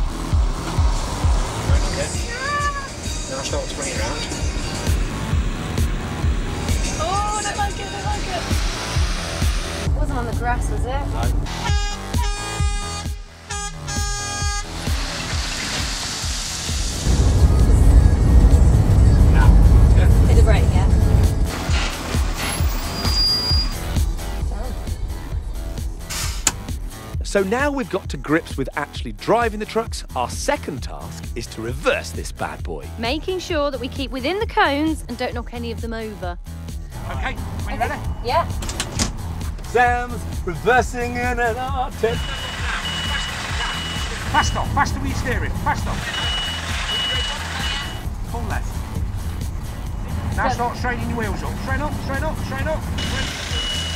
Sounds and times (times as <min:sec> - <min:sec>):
Truck: 0:00.0 - 0:11.6, 0:14.0 - 0:26.7, 0:41.9 - 0:53.9
Music: 0:00.0 - 0:53.9
Speech: 0:27.2 - 0:36.2.